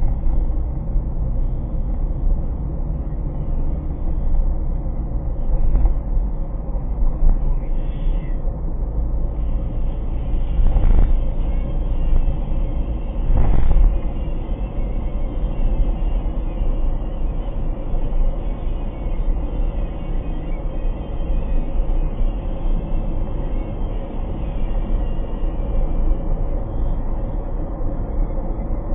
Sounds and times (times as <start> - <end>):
Car: 0.0 - 28.9
Music: 9.4 - 27.3.